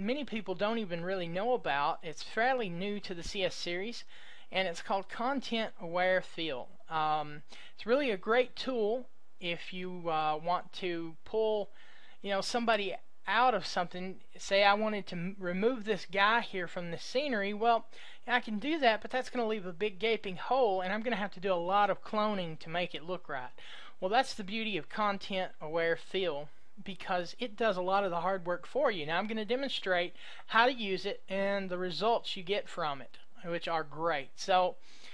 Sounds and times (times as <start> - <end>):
Speech: 0.0 - 34.8.